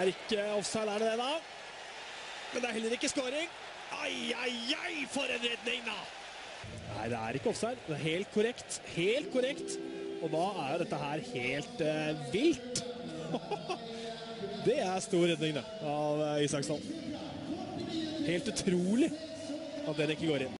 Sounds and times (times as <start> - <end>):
Speech: 0.0 - 1.4, 2.5 - 6.1, 6.9 - 20.5.